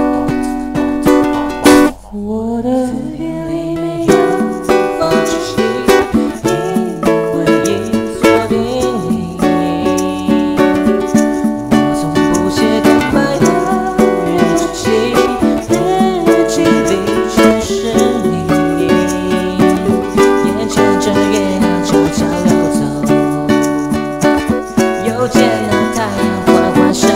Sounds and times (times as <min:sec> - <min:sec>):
Inside, small room: 0:00.0 - 0:27.1
Music: 0:00.0 - 0:27.1.